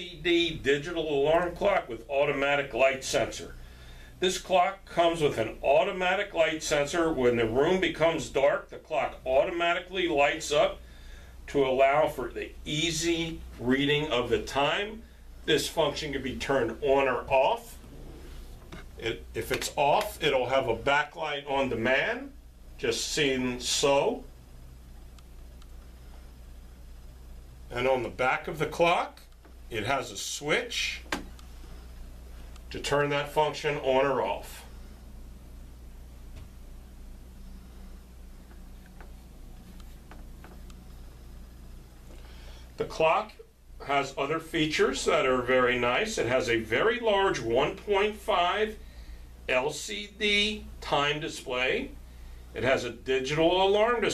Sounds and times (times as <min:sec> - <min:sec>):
Speech: 0:00.0 - 0:03.6, 0:04.2 - 0:10.8, 0:11.5 - 0:17.8, 0:19.0 - 0:24.3, 0:27.7 - 0:31.2, 0:32.7 - 0:34.8, 0:42.8 - 0:48.8, 0:49.5 - 0:52.0, 0:52.6 - 0:54.1.